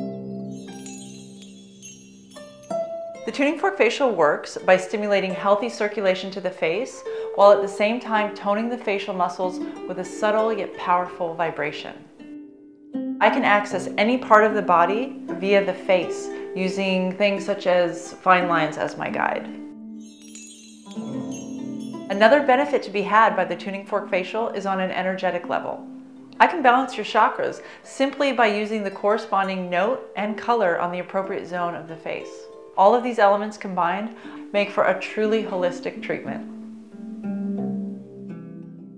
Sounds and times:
Music: 0.0 - 38.9
Speech: 3.3 - 12.0, 13.2 - 19.6, 22.1 - 25.8, 26.4 - 36.5.

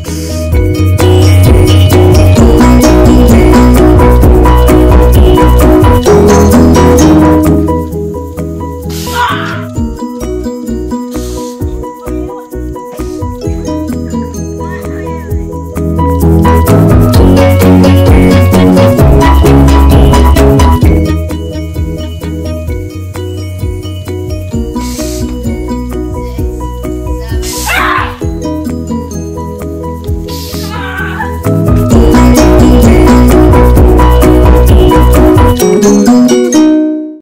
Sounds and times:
Music: 0.0 - 37.2
Speech: 14.4 - 15.5.

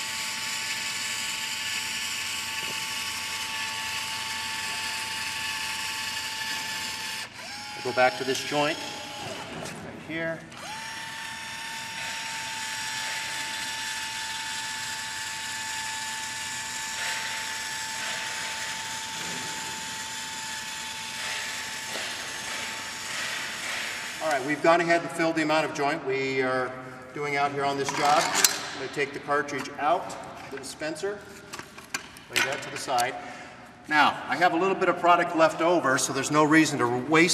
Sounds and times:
Drill: 0.0 - 9.8, 10.5 - 24.6
Speech: 7.8 - 8.8, 24.2 - 31.2, 32.3 - 33.2, 33.9 - 37.3.

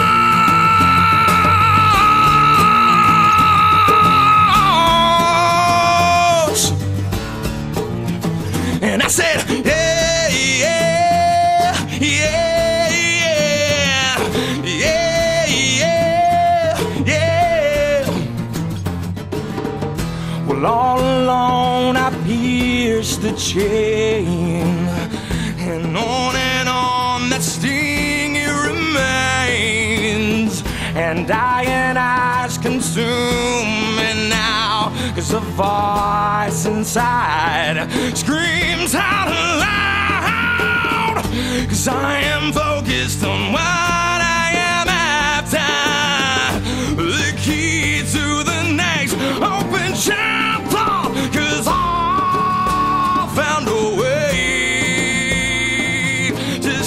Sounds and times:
Music: 0.0 - 56.8.

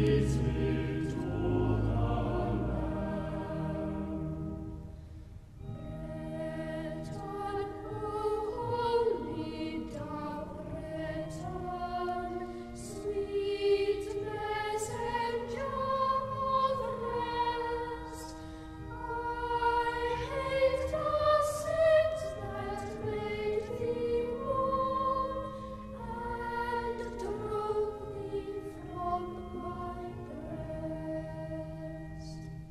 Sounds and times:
Music: 0.0 - 32.7.

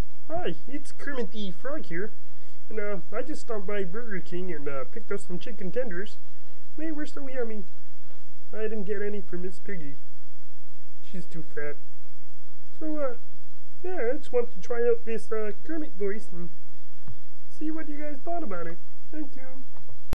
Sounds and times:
Speech: 0.3 - 6.2, 6.8 - 7.7, 8.5 - 10.0, 11.0 - 11.8, 12.8 - 13.2, 13.8 - 16.6, 17.5 - 19.7.

